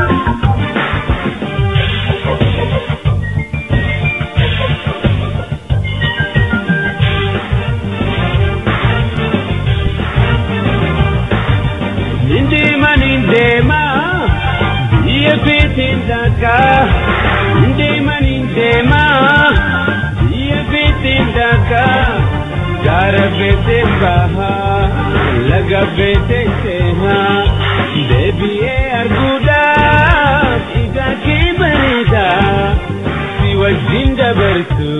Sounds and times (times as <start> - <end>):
Music: 0.0 - 34.9.